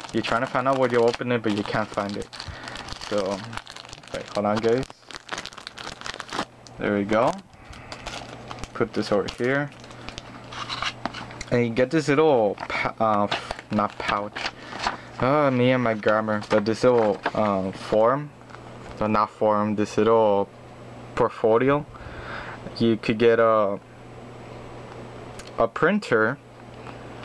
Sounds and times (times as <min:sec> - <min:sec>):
Crumpling, crinkling: 0:00.0 - 0:06.5, 0:07.2 - 0:11.4, 0:12.6 - 0:17.8
Speech: 0:00.1 - 0:02.3, 0:03.1 - 0:05.0, 0:06.8 - 0:07.5, 0:08.8 - 0:09.7, 0:11.5 - 0:14.4, 0:15.2 - 0:18.3, 0:19.0 - 0:20.5, 0:21.2 - 0:21.9, 0:22.7 - 0:23.8, 0:25.4 - 0:26.4.